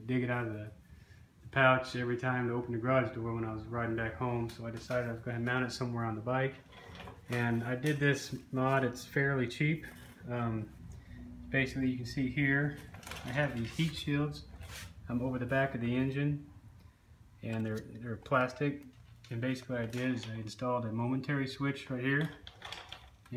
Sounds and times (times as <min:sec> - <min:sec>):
Speech: 0:00.0 - 0:00.8, 0:01.5 - 0:06.6, 0:07.3 - 0:10.7, 0:11.5 - 0:14.5, 0:15.1 - 0:16.5, 0:17.4 - 0:22.4.